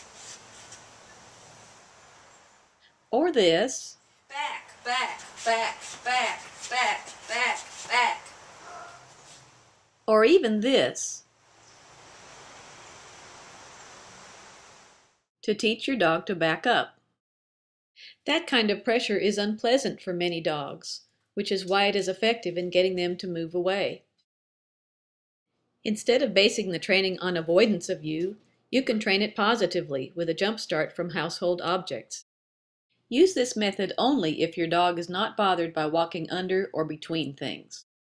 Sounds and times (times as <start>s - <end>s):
Speech: 3.2s - 8.3s, 10.1s - 11.2s, 15.4s - 16.9s, 18.1s - 24.0s, 25.9s - 32.2s, 33.1s - 37.8s.